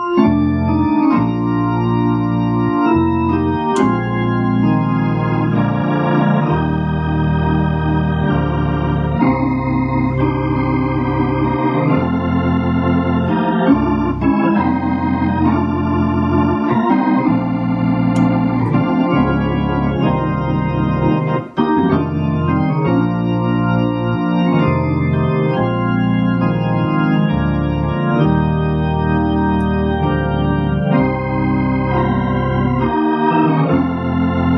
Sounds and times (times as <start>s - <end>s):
Organ: 0.0s - 34.5s.